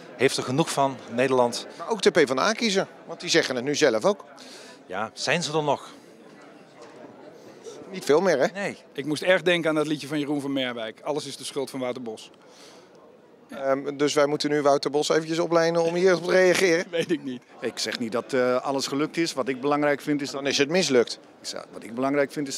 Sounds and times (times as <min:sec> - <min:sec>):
Speech: 0:13.5 - 0:22.5.